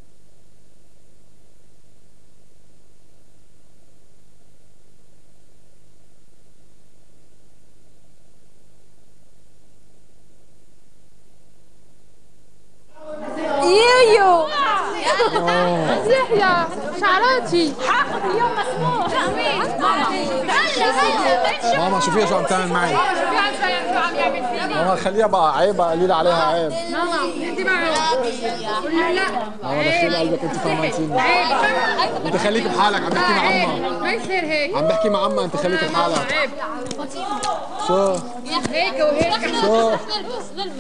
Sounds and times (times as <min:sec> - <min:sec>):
Chatter: 0:12.9 - 0:40.8.